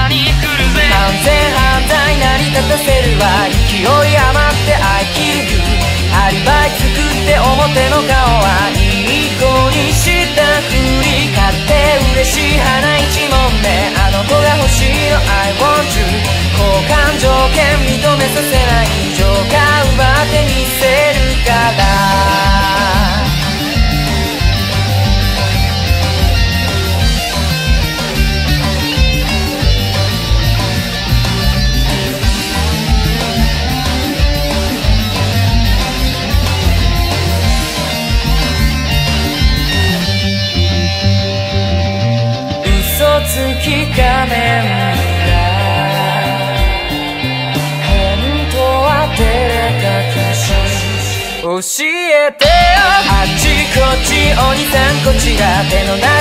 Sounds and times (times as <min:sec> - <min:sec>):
Music: 0:00.0 - 0:56.2.